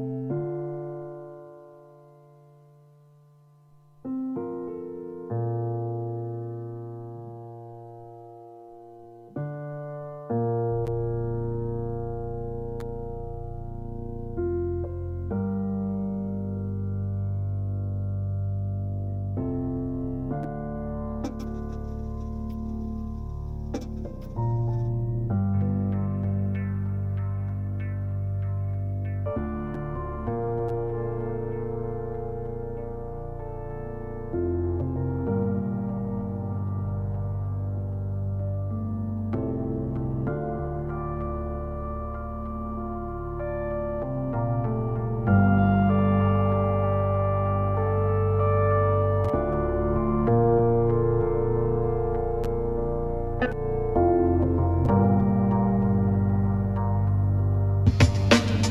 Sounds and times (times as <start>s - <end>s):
Music: 0.0s - 58.7s.